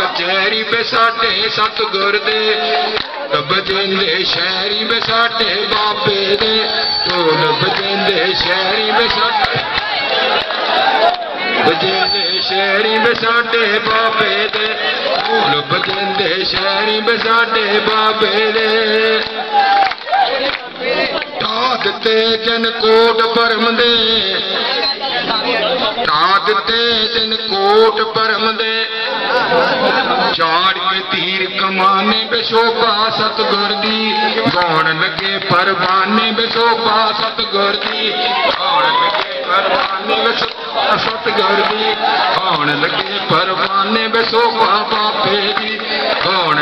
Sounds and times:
Male singing: 0:00.0 - 0:09.7, 0:11.6 - 0:25.0, 0:26.0 - 0:29.1, 0:30.2 - 0:46.6.

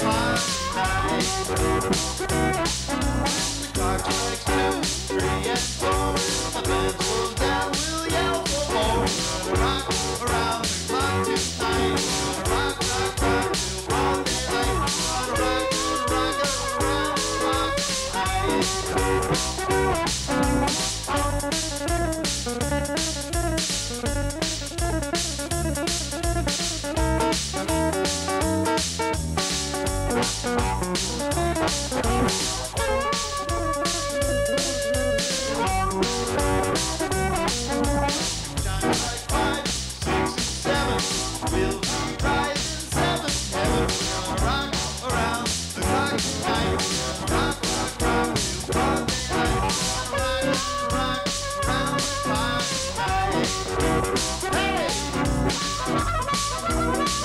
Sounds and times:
Blues: 0:00.0 - 0:57.2.

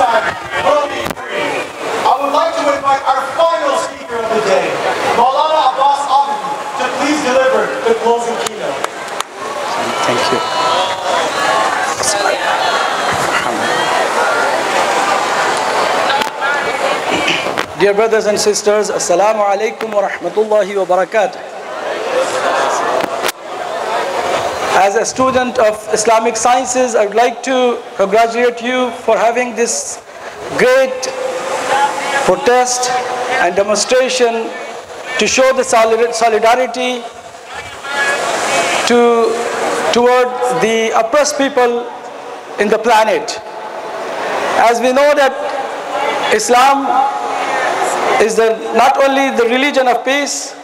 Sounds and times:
Male speech, man speaking: 0:00.0 - 0:08.8, 0:09.8 - 0:10.5, 0:17.8 - 0:21.4, 0:24.8 - 0:38.2, 0:38.8 - 0:42.0, 0:42.6 - 0:43.4, 0:44.6 - 0:45.6, 0:46.2 - 0:47.2, 0:48.2 - 0:50.6
Narration, monologue: 0:02.0 - 0:09.1, 0:17.7 - 0:21.6, 0:24.8 - 0:37.8, 0:38.8 - 0:43.7, 0:44.6 - 0:47.3, 0:48.2 - 0:50.6.

